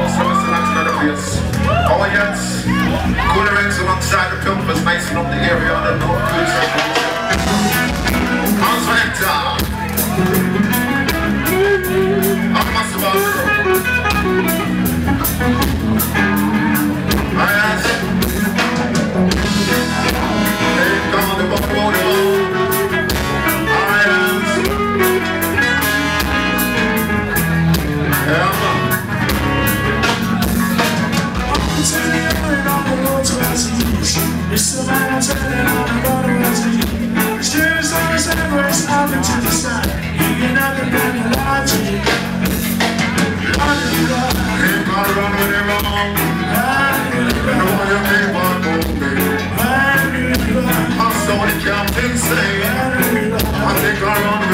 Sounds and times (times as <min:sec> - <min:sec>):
Speech: 0:00.0 - 0:06.8, 0:08.5 - 0:10.2, 0:12.4 - 0:13.5, 0:28.2 - 0:29.1, 0:31.6 - 0:42.5
Music: 0:00.0 - 0:54.5.